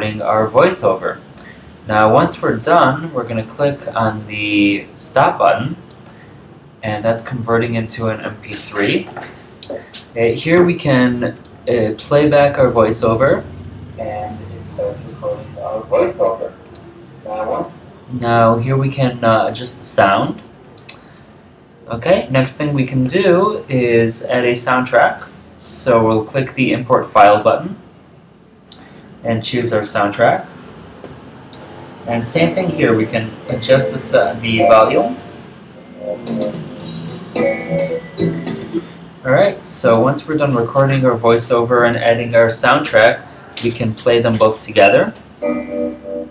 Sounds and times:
Speech: 0.0s - 5.9s, 6.8s - 16.7s, 17.3s - 20.5s, 21.8s - 27.8s, 29.2s - 30.5s, 32.0s - 35.2s, 38.5s - 45.2s.

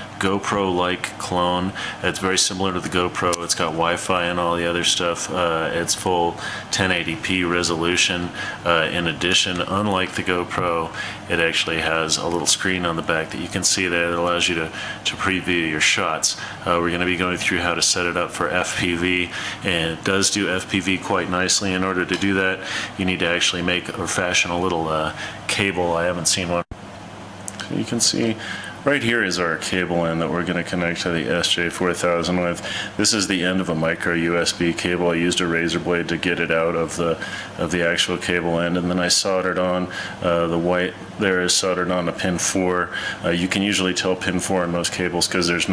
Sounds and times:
Speech: 0.0s - 26.8s, 27.5s - 45.7s.

